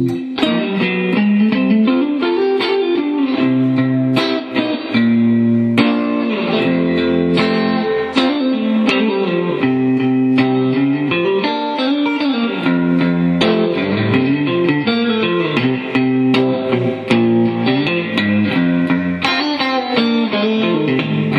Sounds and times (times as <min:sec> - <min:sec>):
Music: 0:00.0 - 0:21.3.